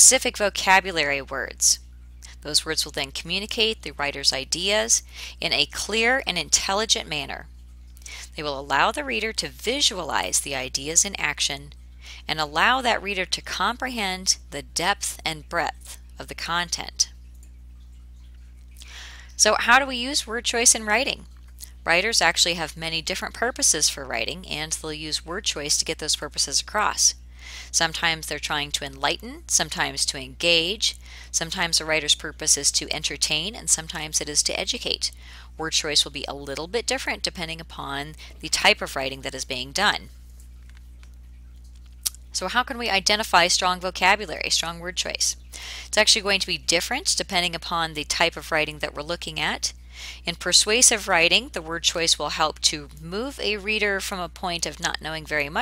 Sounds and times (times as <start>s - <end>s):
Speech: 0.0s - 7.5s, 8.1s - 17.1s, 19.4s - 40.1s, 42.4s - 55.6s.